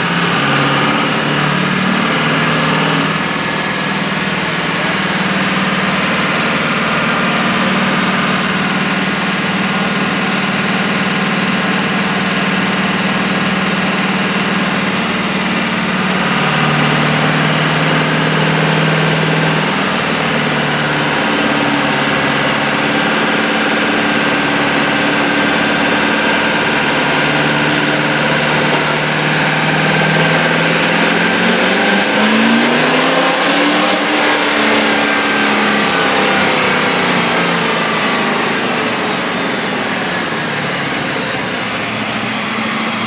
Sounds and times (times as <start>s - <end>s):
Outside, urban or manmade: 0.0s - 43.0s
Truck: 0.0s - 43.0s.